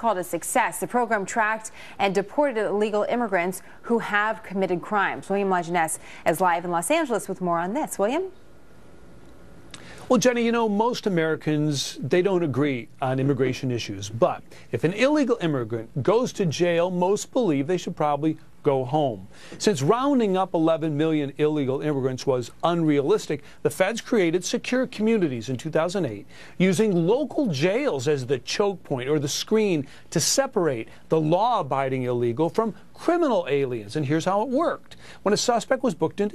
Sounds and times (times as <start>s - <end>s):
Speech: 0.0s - 8.4s, 10.1s - 36.3s.